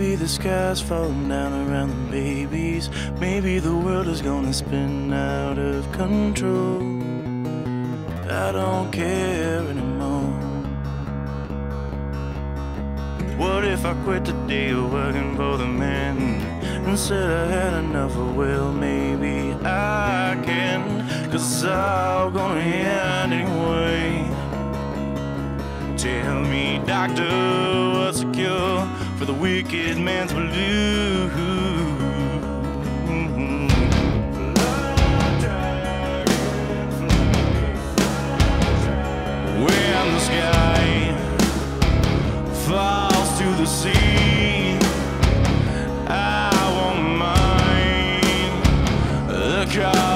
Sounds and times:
Music: 0:00.0 - 0:50.1.

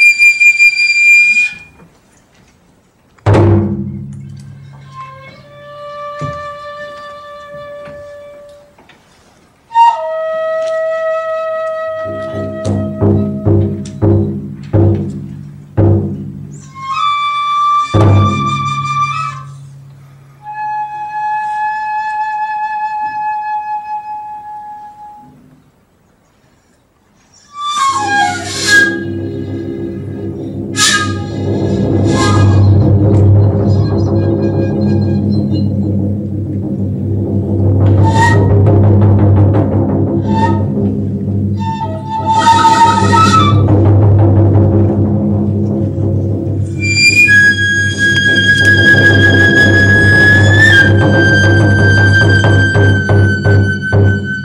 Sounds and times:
Flute: 0:00.0 - 0:01.9, 0:03.9 - 0:08.8, 0:09.6 - 0:14.4, 0:16.5 - 0:25.6, 0:27.2 - 0:36.4, 0:37.8 - 0:39.1, 0:40.1 - 0:44.0, 0:46.6 - 0:54.4.

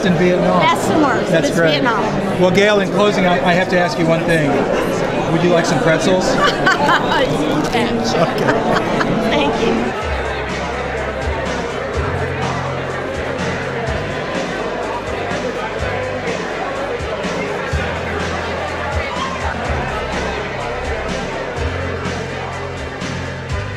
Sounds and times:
Speech: 0:00.0 - 0:10.1
Inside, public space: 0:00.0 - 0:23.7.

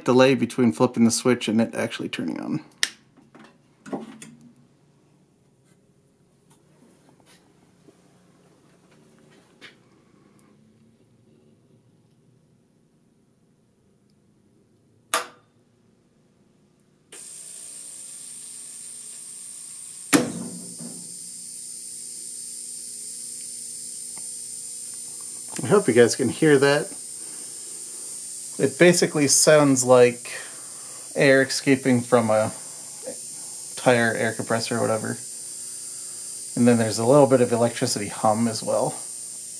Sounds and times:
Speech: 0:00.0 - 0:02.7, 0:25.5 - 0:27.0, 0:28.6 - 0:30.5, 0:31.2 - 0:33.2, 0:33.8 - 0:35.2, 0:36.6 - 0:39.0.

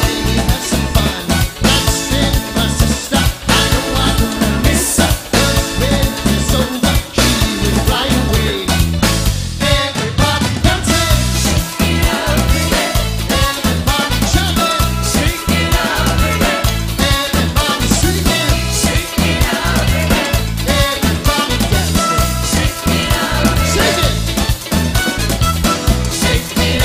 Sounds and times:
Singing: 0:00.0 - 0:08.8, 0:09.6 - 0:24.3, 0:26.1 - 0:26.8
Salsa music: 0:00.0 - 0:26.8.

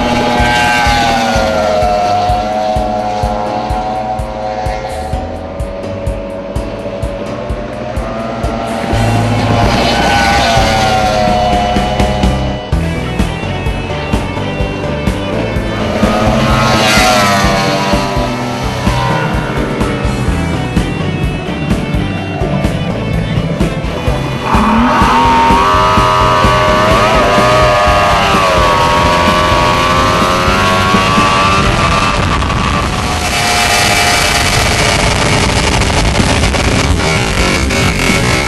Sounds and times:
Motorboat, speedboat: 0:00.0 - 0:38.4
Music: 0:00.0 - 0:38.4.

